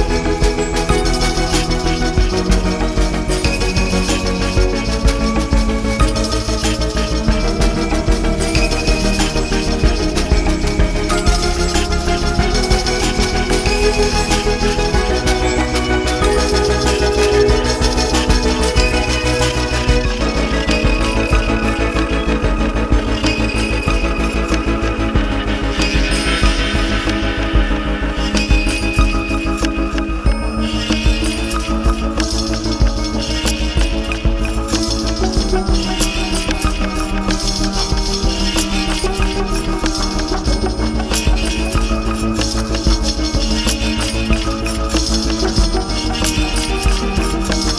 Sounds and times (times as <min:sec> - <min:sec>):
Music: 0:00.0 - 0:47.7.